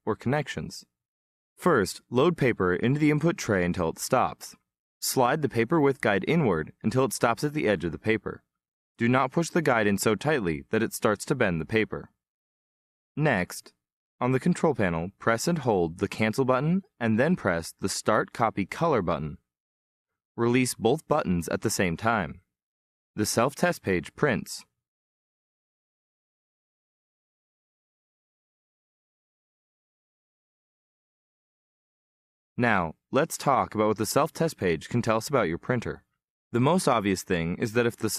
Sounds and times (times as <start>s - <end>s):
Speech: 0.0s - 1.0s, 1.6s - 12.2s, 13.2s - 19.5s, 20.4s - 22.5s, 23.2s - 24.8s, 32.6s - 38.1s.